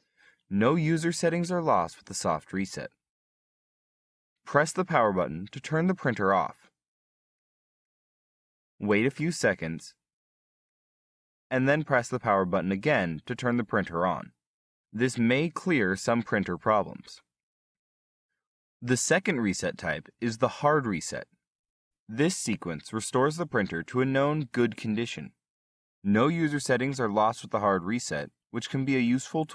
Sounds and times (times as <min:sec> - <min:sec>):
Speech: 0:00.5 - 0:03.0, 0:04.5 - 0:06.8, 0:08.8 - 0:10.0, 0:11.5 - 0:14.4, 0:15.0 - 0:17.3, 0:18.8 - 0:21.4, 0:22.1 - 0:25.4, 0:26.1 - 0:29.5.